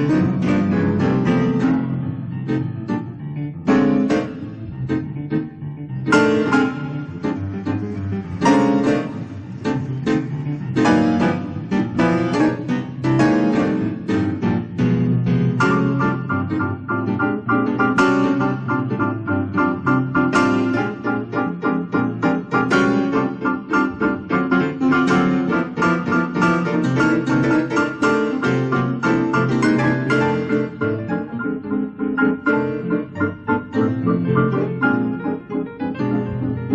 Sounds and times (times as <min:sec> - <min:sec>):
Electronic organ: 0:00.0 - 0:36.7
Piano: 0:00.0 - 0:36.7.